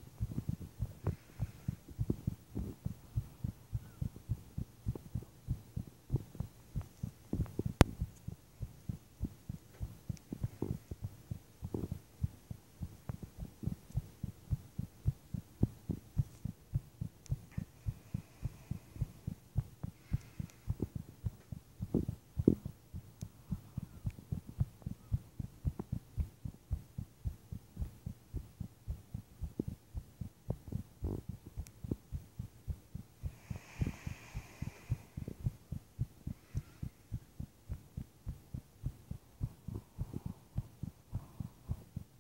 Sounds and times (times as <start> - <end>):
Heart murmur: 0.0 - 42.2.